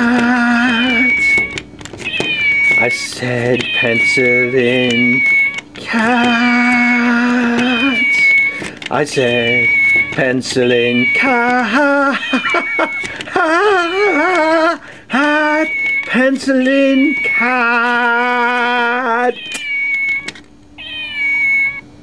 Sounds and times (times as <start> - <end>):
Meow: 0.0 - 13.0, 13.7 - 14.6, 15.2 - 21.9.